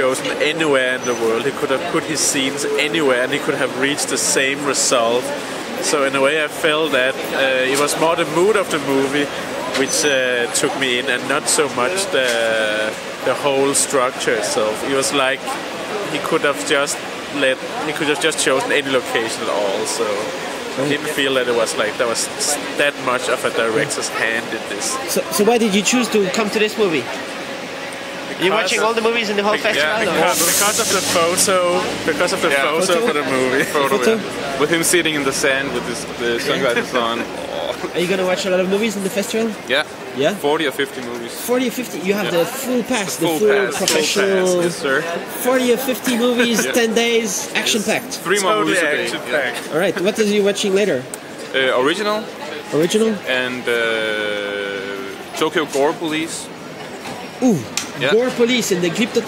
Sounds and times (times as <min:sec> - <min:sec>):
Speech: 0:00.0 - 0:27.1, 0:28.4 - 0:56.5.